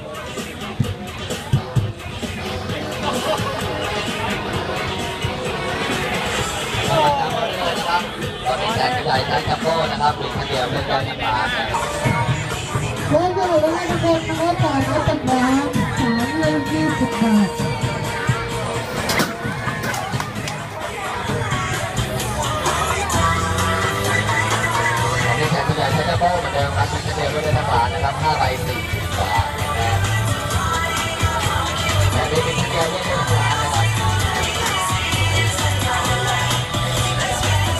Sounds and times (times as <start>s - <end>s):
Music: 0.0s - 37.7s
Speech: 6.8s - 11.9s, 12.8s - 17.7s, 25.3s - 30.1s, 32.1s - 34.1s.